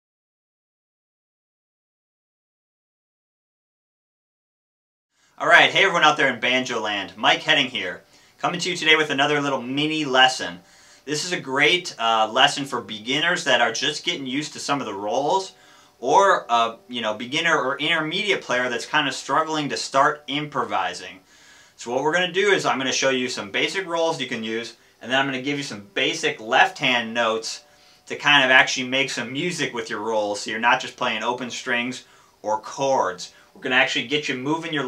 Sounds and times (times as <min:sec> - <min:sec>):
Speech: 0:05.4 - 0:21.2, 0:21.8 - 0:34.8.